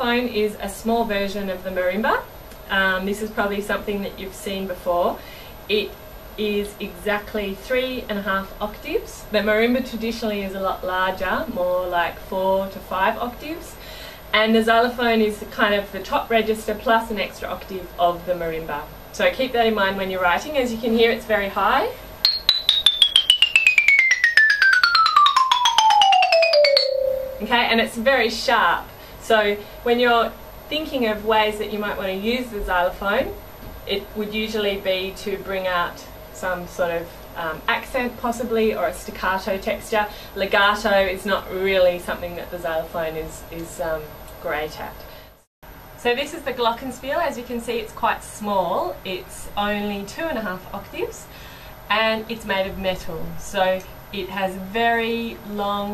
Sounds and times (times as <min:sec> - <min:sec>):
Glockenspiel: 0:22.2 - 0:27.7
Marimba, xylophone: 0:22.2 - 0:27.7.